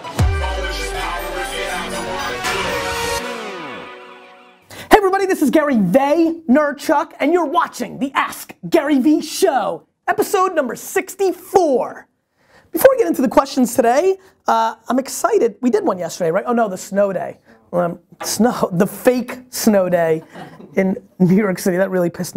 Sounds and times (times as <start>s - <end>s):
Speech: 4.9s - 12.1s, 12.7s - 22.3s.